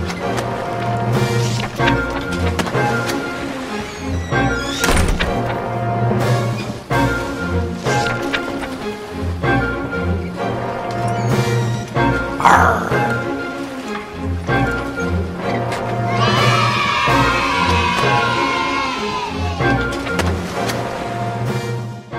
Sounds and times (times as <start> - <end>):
Waves, surf: 0.0 - 22.1.